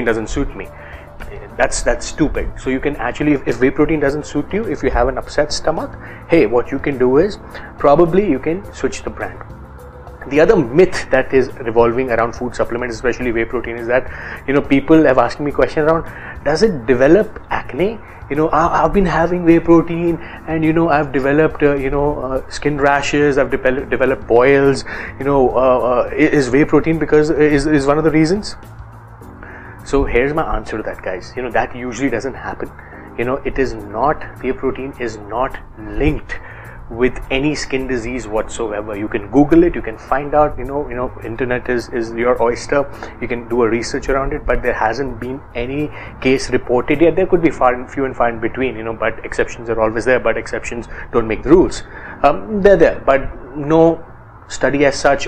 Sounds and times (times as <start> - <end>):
Speech: 0.0 - 9.4, 10.2 - 28.6, 29.8 - 55.2
Music: 0.0 - 55.2.